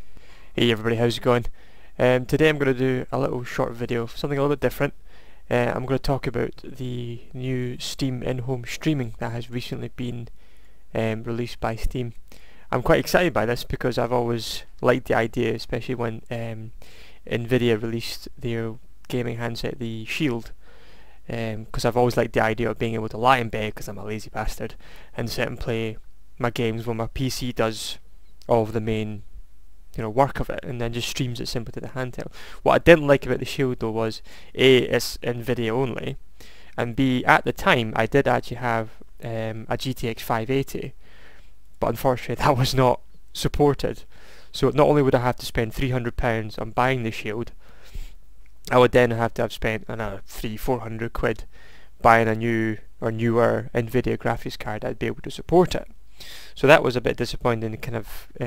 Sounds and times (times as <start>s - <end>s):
Speech: 0.6s - 10.3s, 11.0s - 20.6s, 21.3s - 29.3s, 30.0s - 36.2s, 36.8s - 41.0s, 41.8s - 47.6s, 48.7s - 56.0s, 56.6s - 58.4s.